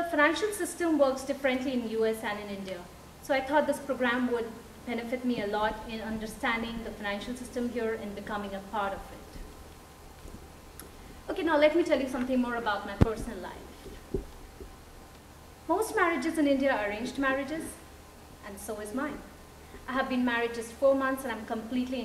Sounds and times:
Female speech, woman speaking: 0.0 - 9.3, 11.3 - 13.7, 15.7 - 17.8, 18.4 - 19.3, 19.9 - 22.0.

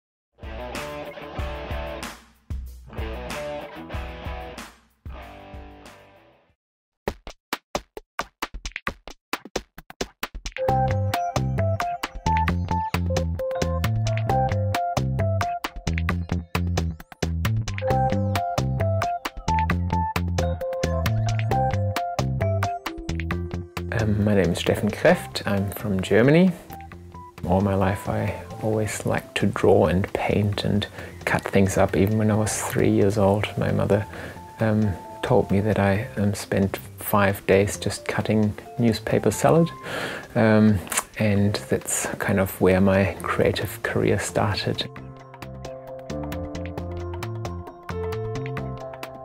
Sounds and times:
Drum machine: 7.1 - 25.2.

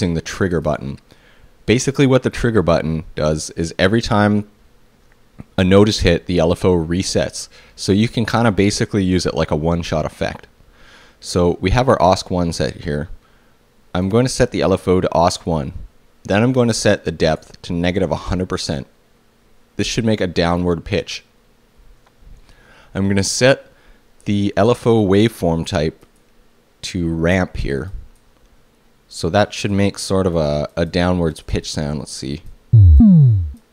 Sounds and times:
Speech: 0.0 - 1.1, 1.7 - 4.6, 5.4 - 10.6, 11.2 - 13.2, 13.9 - 19.0, 19.8 - 21.3, 23.0 - 26.0, 26.8 - 28.1, 29.1 - 32.5.

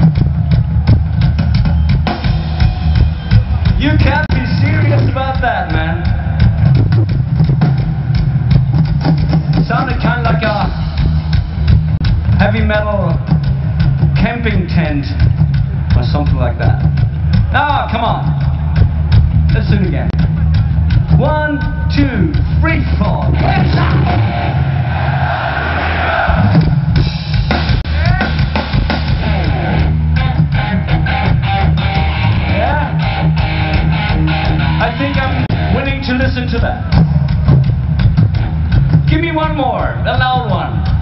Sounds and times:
Music: 0.0 - 41.0
Male speech, man speaking: 3.8 - 6.1, 9.6 - 10.8, 12.4 - 13.2, 14.2 - 15.2, 16.0 - 16.8, 17.6 - 18.3, 19.5 - 20.2, 21.2 - 24.1, 32.5 - 33.0, 34.8 - 36.9, 39.1 - 40.8.

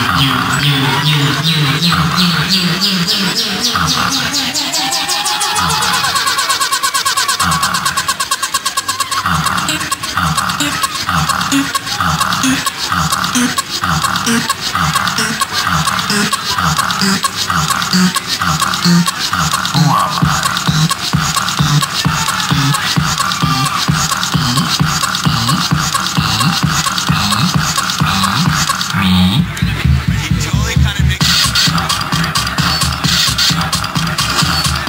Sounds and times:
Funny music: 0.0 - 34.8.

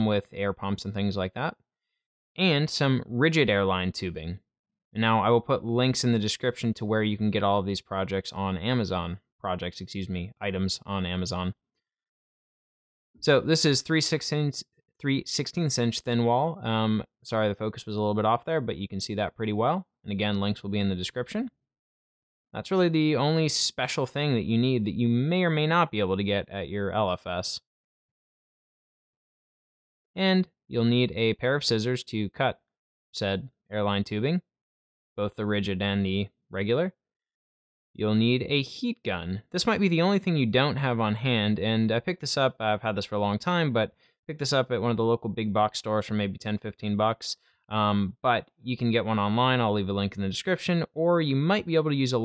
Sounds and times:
Speech: 0.0 - 1.6, 2.4 - 4.4, 5.0 - 11.6, 13.2 - 21.6, 22.6 - 27.7, 30.2 - 32.6, 33.2 - 34.4, 35.2 - 37.0, 38.0 - 52.2.

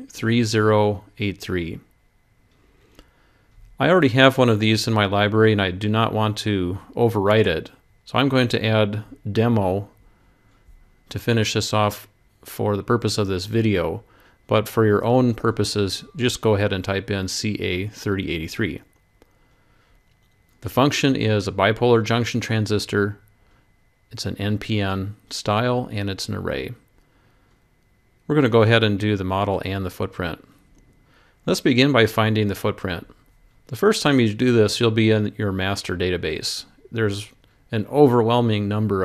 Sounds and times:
Speech: 0.0 - 1.9, 3.8 - 10.0, 11.1 - 18.9, 20.6 - 23.3, 24.1 - 26.9, 28.3 - 30.5, 31.5 - 39.0.

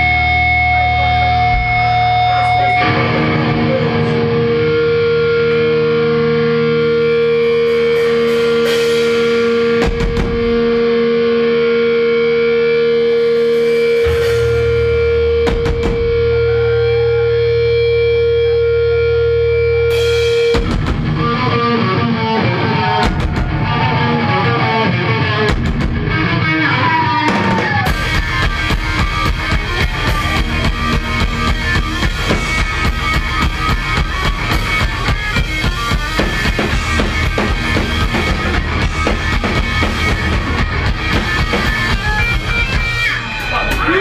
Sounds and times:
Music: 0.0 - 44.0.

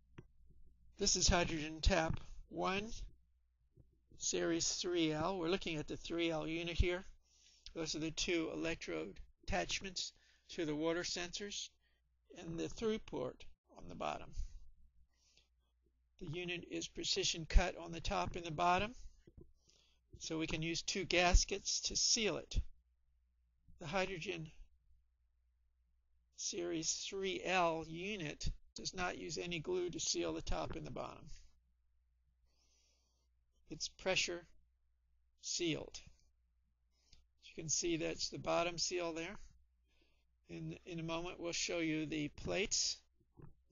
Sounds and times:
Speech: 1.0 - 3.1, 4.2 - 14.5, 16.2 - 19.0, 20.2 - 22.7, 23.8 - 24.6, 26.4 - 31.4, 33.7 - 34.5, 35.4 - 36.2, 37.4 - 39.5, 40.5 - 43.1.

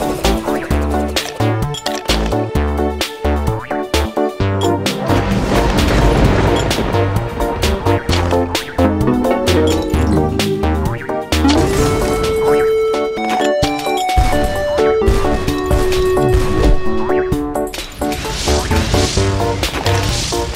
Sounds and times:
Music: 0.0 - 20.5
Smash, crash: 5.0 - 10.0, 17.8 - 20.5.

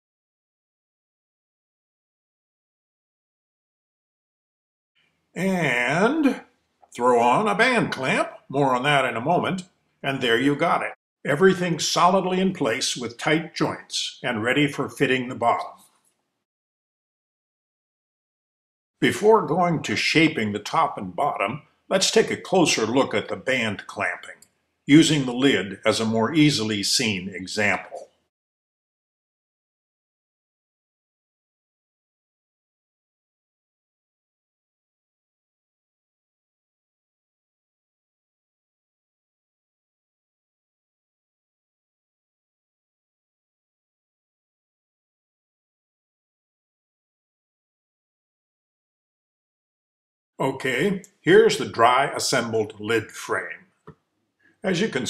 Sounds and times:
Speech: 5.4 - 6.4, 7.0 - 15.8, 19.0 - 28.0, 50.4 - 53.6, 54.6 - 55.0.

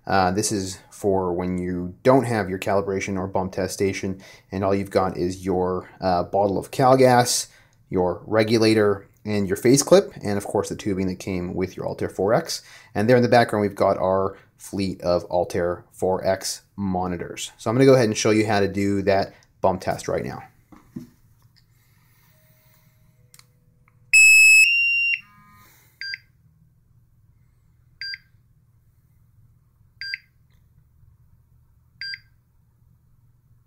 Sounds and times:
Inside, small room: 0.0 - 33.6
Speech: 0.1 - 20.5.

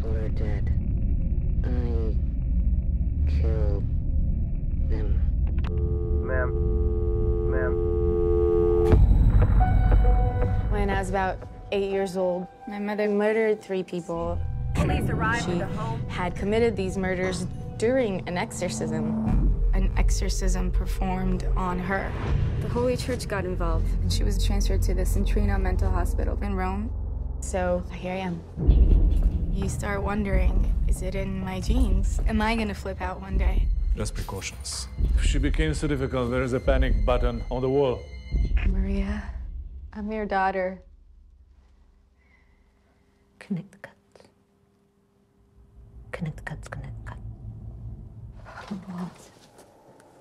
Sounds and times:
Music: 8.4 - 41.0.

